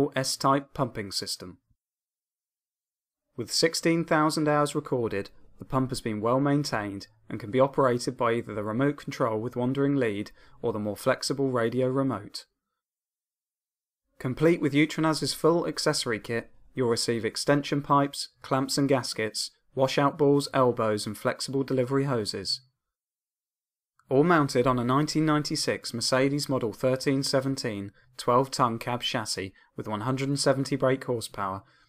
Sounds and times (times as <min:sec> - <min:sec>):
Speech: 0:00.0 - 0:01.6, 0:03.4 - 0:12.6, 0:14.2 - 0:22.8, 0:24.1 - 0:31.7.